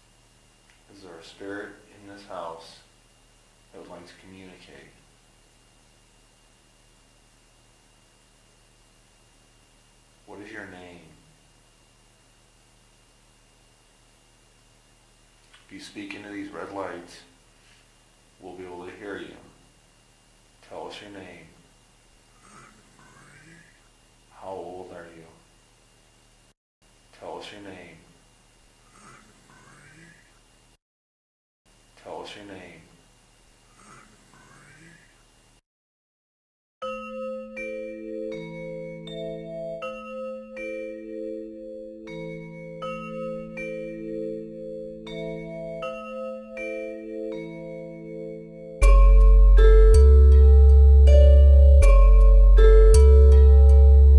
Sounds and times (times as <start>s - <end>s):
Marimba, xylophone: 36.8s - 44.5s, 48.8s - 54.1s
Glockenspiel: 36.8s - 54.1s.